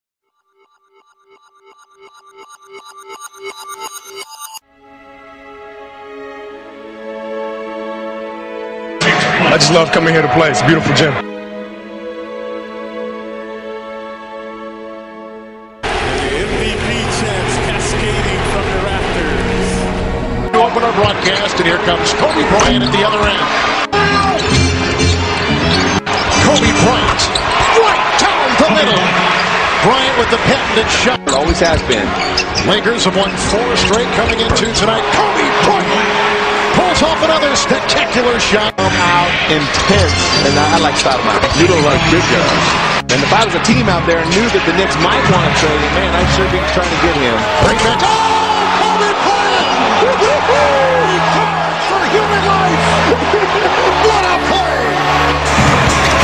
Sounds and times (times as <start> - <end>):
Music: 0.4 - 56.2
Speech: 9.0 - 11.2, 16.1 - 19.8, 20.5 - 24.4, 27.8 - 29.2, 29.8 - 36.0, 36.7 - 54.9.